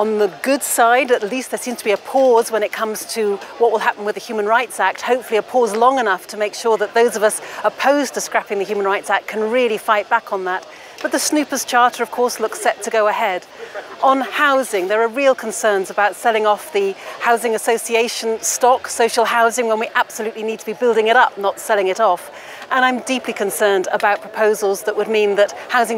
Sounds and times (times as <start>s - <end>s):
Female speech, woman speaking: 0.0s - 25.9s
Narration, monologue: 0.0s - 25.9s.